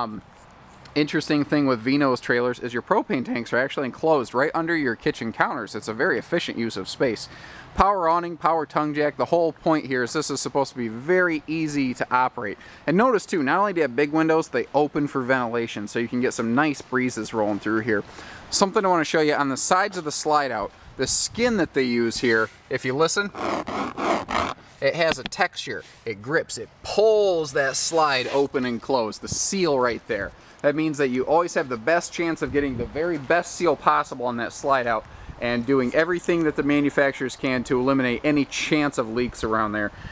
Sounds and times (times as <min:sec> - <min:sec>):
Speech: 0:00.0 - 0:00.2, 0:00.9 - 0:23.4, 0:24.8 - 0:40.0.